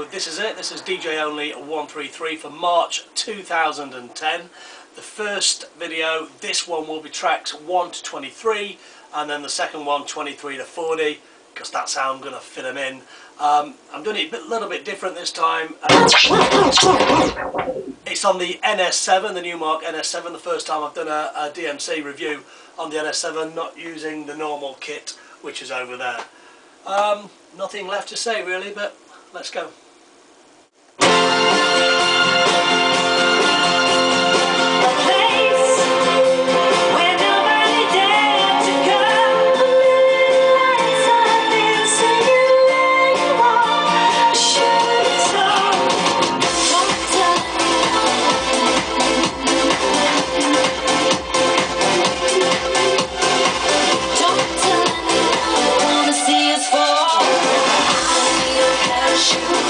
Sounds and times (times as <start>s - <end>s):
Speech: 0.0s - 26.3s, 26.9s - 29.8s.